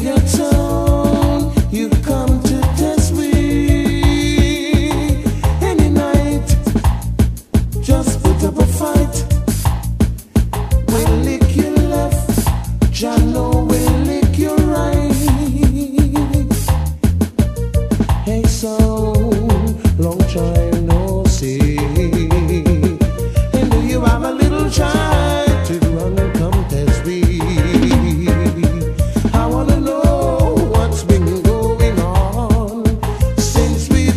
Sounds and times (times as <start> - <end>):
Music: 0.0 - 34.1.